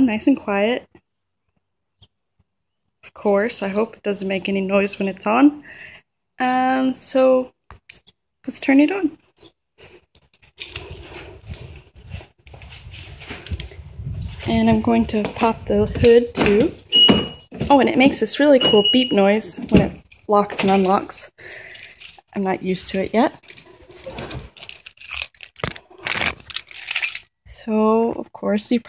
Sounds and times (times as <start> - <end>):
Speech: 0.0 - 0.9, 3.1 - 5.6, 6.4 - 7.6, 8.4 - 9.2, 14.4 - 16.8, 17.6 - 21.3, 22.4 - 23.4, 27.5 - 28.8.